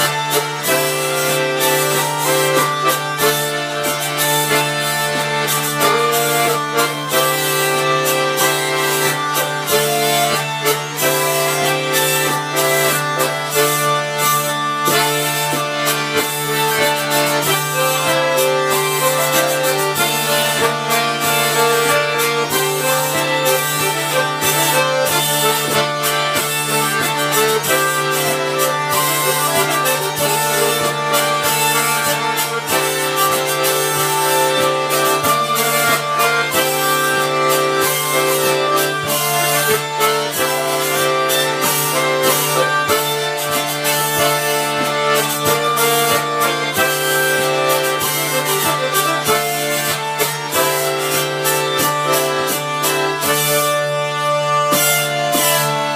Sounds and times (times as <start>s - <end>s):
Accordion: 0.0s - 55.9s.